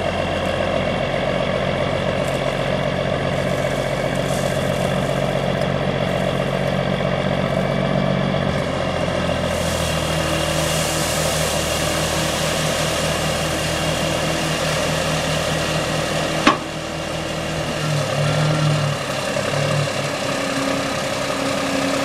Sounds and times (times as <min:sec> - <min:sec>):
Outside, urban or manmade: 0:00.0 - 0:22.0
Truck: 0:00.0 - 0:22.0.